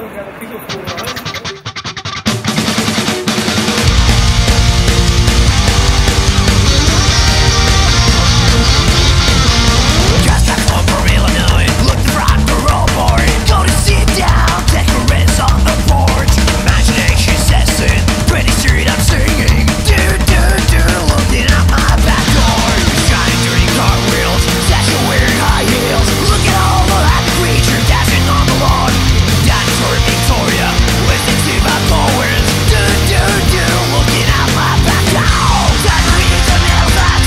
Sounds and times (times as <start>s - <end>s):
Music: 0.1s - 37.2s.